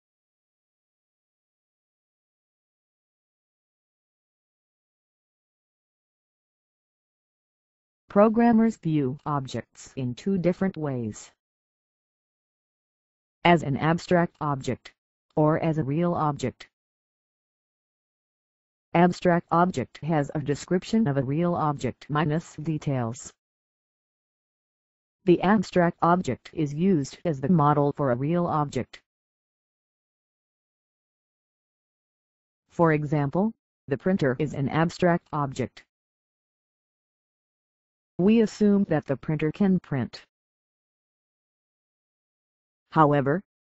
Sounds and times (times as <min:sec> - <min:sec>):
Speech: 0:08.1 - 0:11.4, 0:13.5 - 0:16.7, 0:19.0 - 0:23.3, 0:25.3 - 0:29.0, 0:32.8 - 0:35.8, 0:38.2 - 0:40.3, 0:43.0 - 0:43.5.